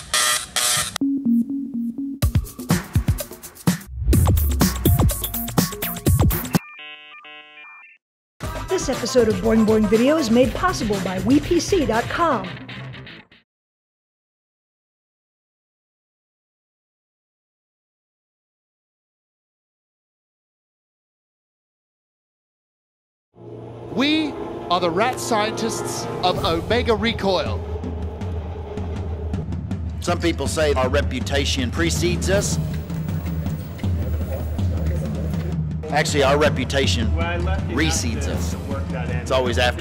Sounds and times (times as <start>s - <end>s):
Music: 1.0s - 13.5s, 23.4s - 39.8s
Speech: 8.7s - 12.5s, 23.9s - 27.6s, 30.0s - 32.7s, 34.1s - 39.8s.